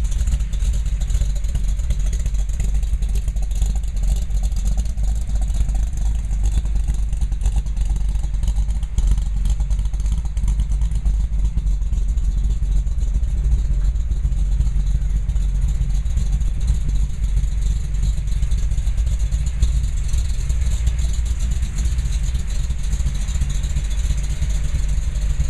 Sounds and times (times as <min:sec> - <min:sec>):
Truck: 0:00.0 - 0:25.4.